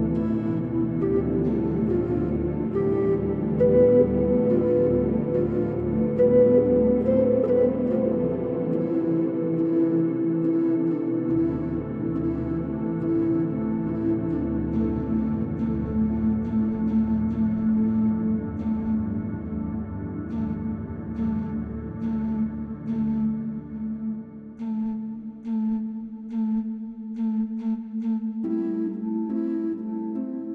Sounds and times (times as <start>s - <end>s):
Ambient music: 0.0s - 30.5s.